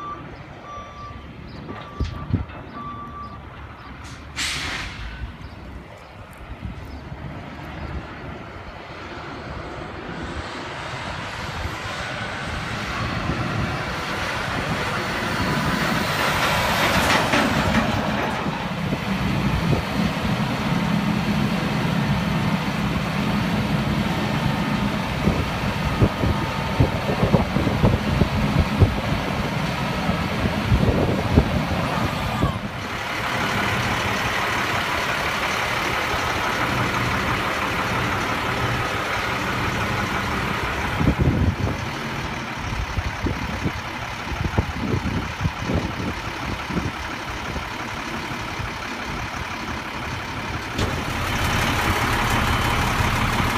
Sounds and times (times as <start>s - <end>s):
Truck: 0.0s - 53.5s.